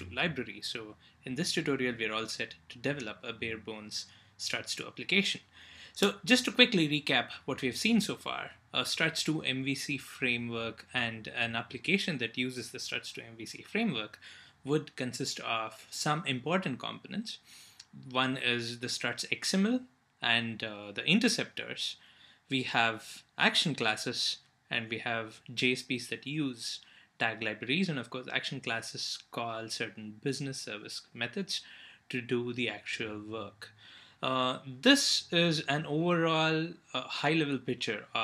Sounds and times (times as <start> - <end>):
Speech: 0.0 - 38.2.